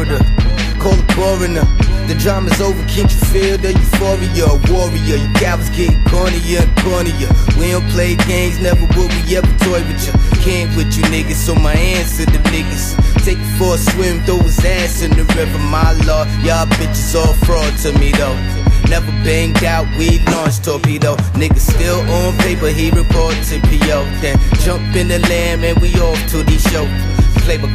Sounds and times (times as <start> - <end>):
Music: 0.0 - 27.7.